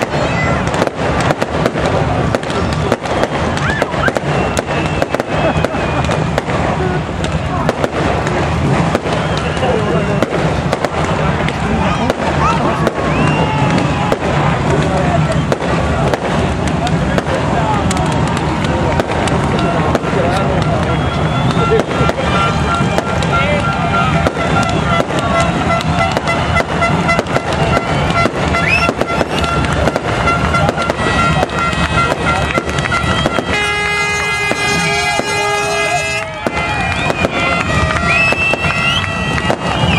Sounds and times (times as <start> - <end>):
Speech: 14.4 - 26.0.